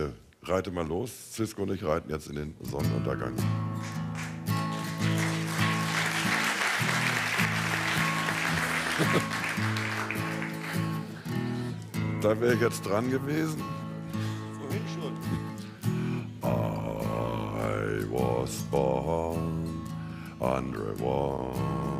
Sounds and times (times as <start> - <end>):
Speech: 0.0 - 3.4, 12.2 - 13.6, 14.6 - 15.2
Music: 2.6 - 22.0.